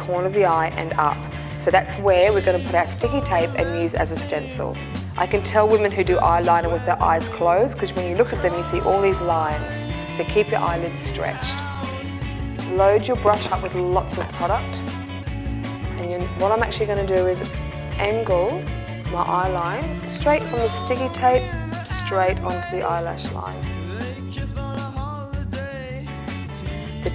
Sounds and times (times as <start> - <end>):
Speech: 0.0 - 11.6, 12.7 - 14.8, 16.0 - 23.6
Music: 0.0 - 27.1.